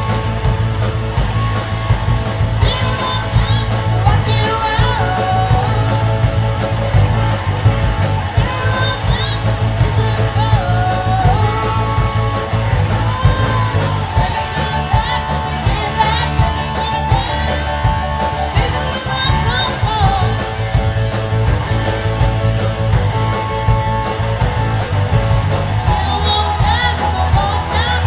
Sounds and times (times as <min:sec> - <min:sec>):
Rock and roll: 0:00.0 - 0:28.0.